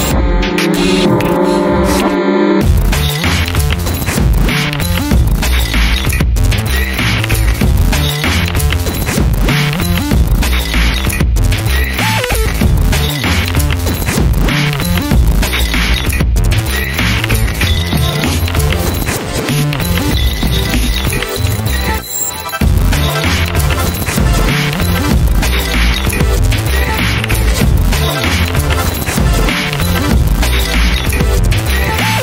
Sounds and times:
Dance music: 0:00.0 - 0:32.2
Exciting music: 0:00.0 - 0:32.2.

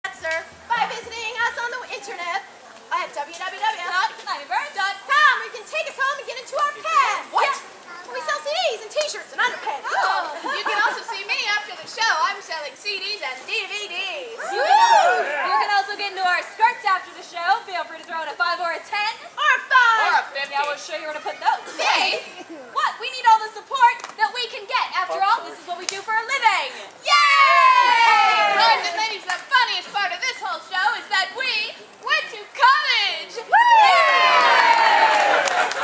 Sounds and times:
Child speech, kid speaking: 0:00.8 - 0:14.4, 0:19.6 - 0:22.2.

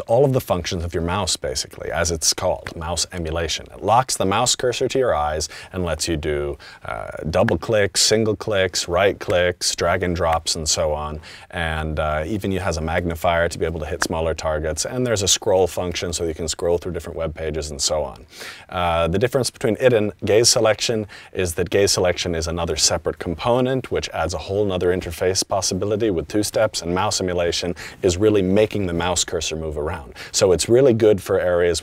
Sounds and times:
Speech: 0:00.0 - 0:31.8.

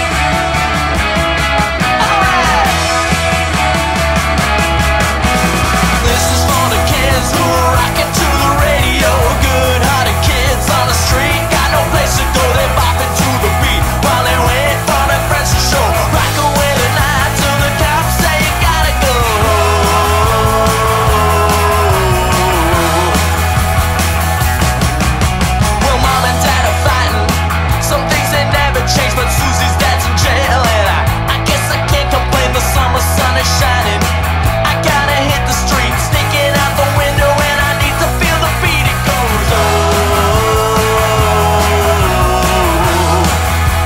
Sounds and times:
Independent music: 0:00.0 - 0:43.8.

